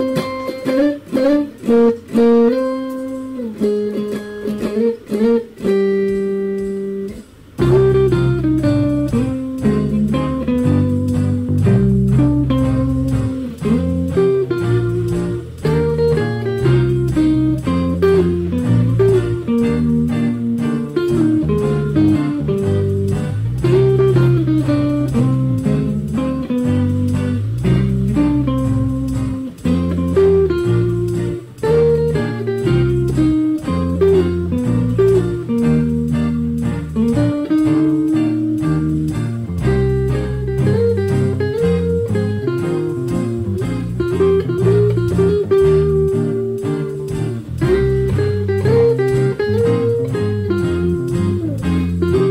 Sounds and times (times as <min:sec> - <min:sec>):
Music: 0:00.0 - 0:52.3.